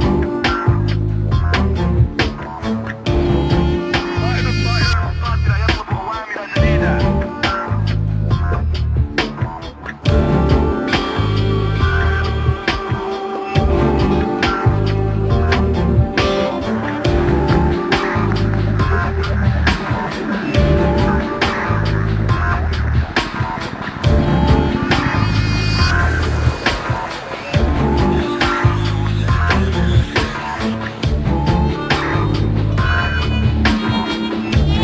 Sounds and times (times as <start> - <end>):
Music: 0.0 - 34.8
Speech: 4.0 - 7.6.